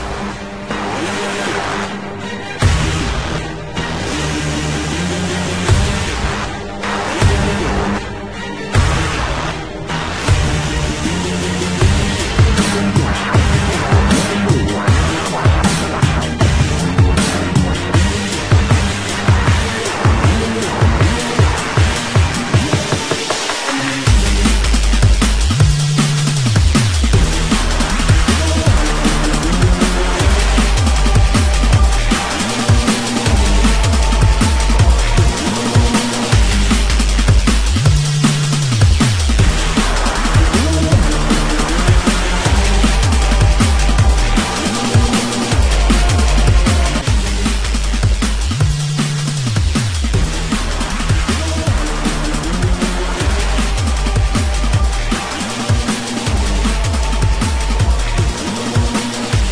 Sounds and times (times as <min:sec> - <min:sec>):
Music: 0:00.0 - 0:59.5.